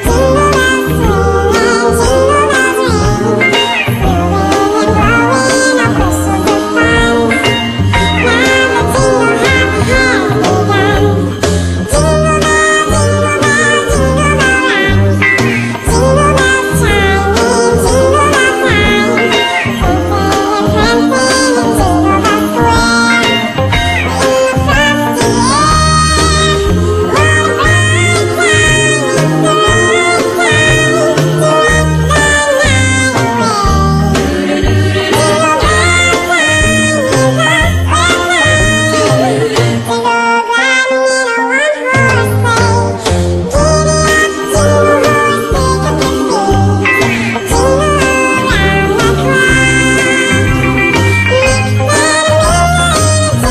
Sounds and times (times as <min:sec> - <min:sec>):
Singing: 0:00.0 - 0:11.3, 0:43.5 - 0:53.5
Music: 0:00.0 - 0:53.5.